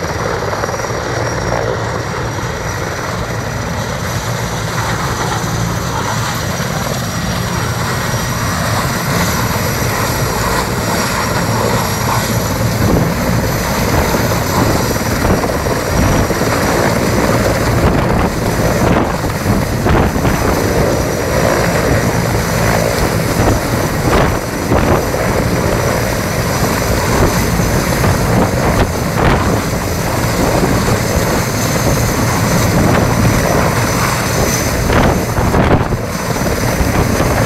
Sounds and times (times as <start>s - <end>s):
Helicopter: 0.0s - 37.4s.